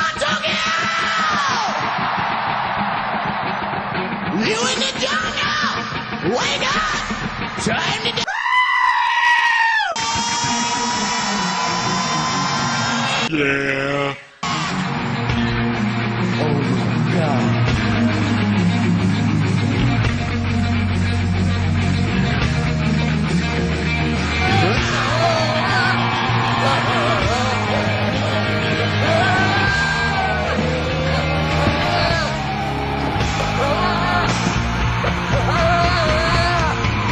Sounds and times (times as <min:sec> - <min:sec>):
Screaming: 0:00.0 - 0:03.6, 0:08.2 - 0:13.3, 0:24.4 - 0:28.4, 0:29.0 - 0:37.1.